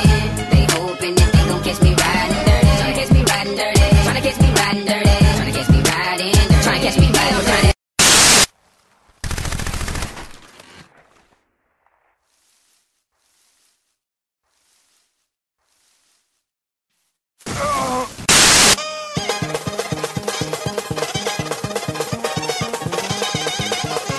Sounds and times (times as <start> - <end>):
Music: 0.0 - 7.8, 18.8 - 24.1
Groan: 17.5 - 18.2.